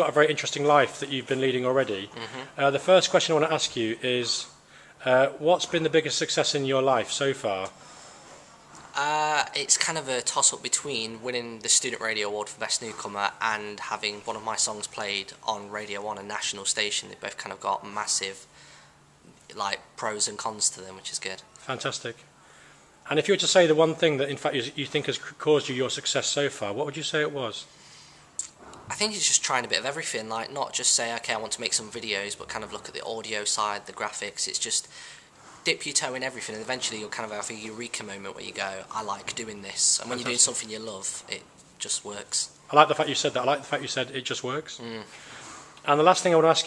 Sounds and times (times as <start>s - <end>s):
Speech: 0.0s - 7.7s, 8.9s - 18.5s, 19.5s - 22.2s, 23.1s - 27.7s, 28.4s - 34.9s, 35.6s - 45.1s, 45.8s - 46.6s.